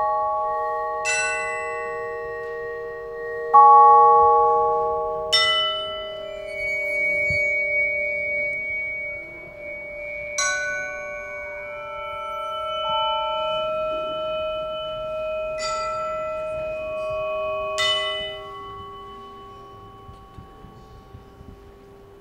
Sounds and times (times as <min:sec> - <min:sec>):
Musical instrument: 0:00.0 - 0:18.0.